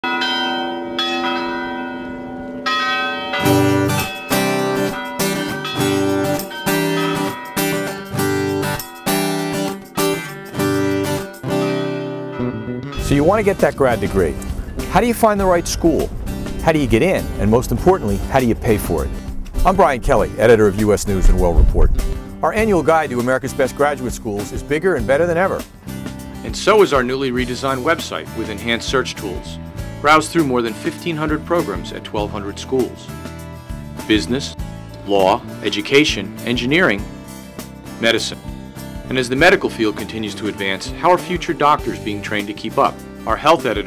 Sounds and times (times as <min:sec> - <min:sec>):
Church bell: 0:00.0 - 0:12.0.